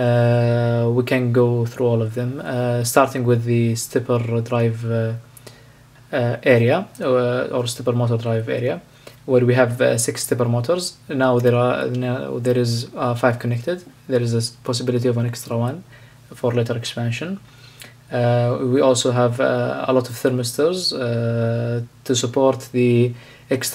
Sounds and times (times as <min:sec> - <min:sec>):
Speech: 0:00.0 - 0:05.3, 0:06.1 - 0:17.4, 0:18.1 - 0:23.7.